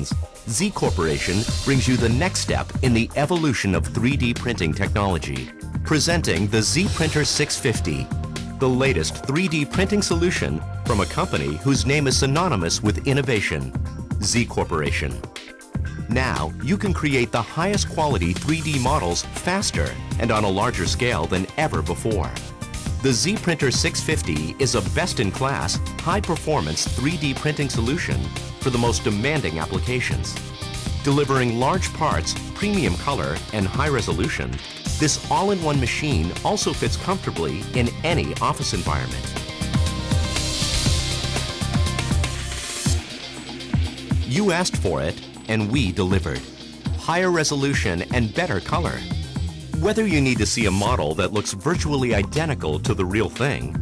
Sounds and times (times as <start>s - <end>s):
Speech: 0.0s - 15.2s, 16.1s - 22.4s, 23.0s - 30.4s, 31.1s - 39.3s, 44.3s - 49.1s, 49.8s - 53.8s
Music: 0.0s - 53.8s.